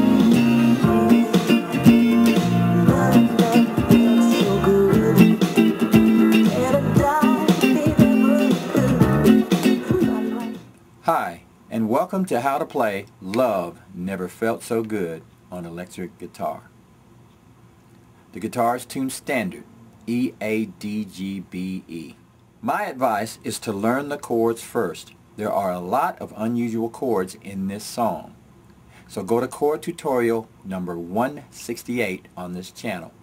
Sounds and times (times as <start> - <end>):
Speech: 11.0 - 16.7, 18.3 - 28.4, 29.1 - 33.2.